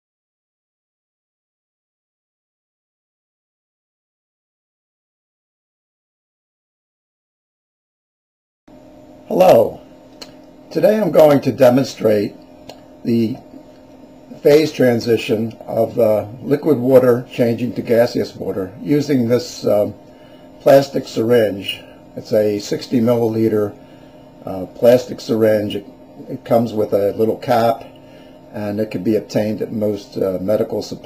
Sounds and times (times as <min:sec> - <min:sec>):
Speech: 0:09.3 - 0:09.8, 0:10.7 - 0:12.4, 0:13.0 - 0:13.5, 0:14.3 - 0:20.0, 0:20.6 - 0:23.8, 0:24.4 - 0:31.0.